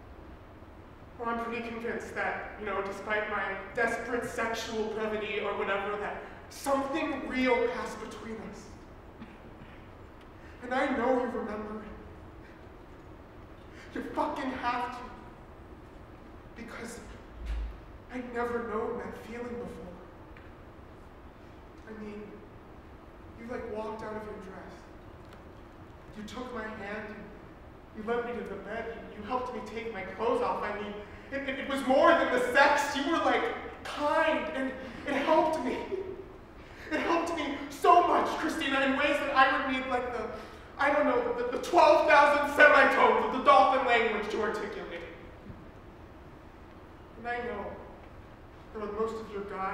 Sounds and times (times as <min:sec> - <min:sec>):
Narration, monologue: 0:00.0 - 0:49.7.